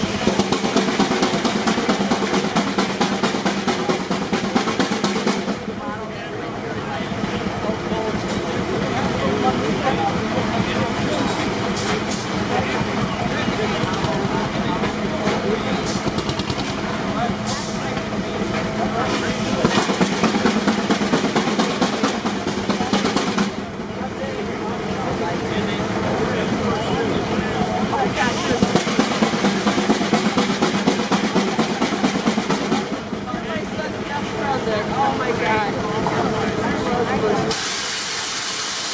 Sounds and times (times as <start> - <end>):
Hiss: 37.5 - 38.9.